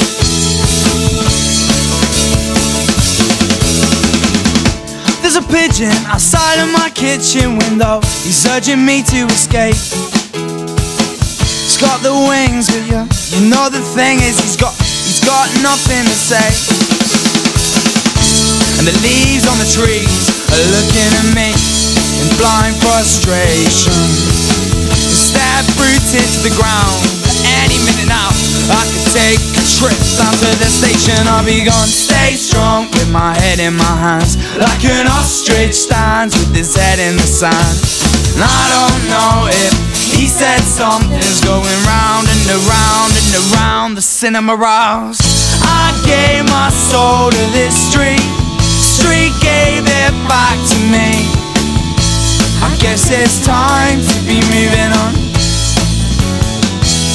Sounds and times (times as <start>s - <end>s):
Music: 0.0s - 57.1s.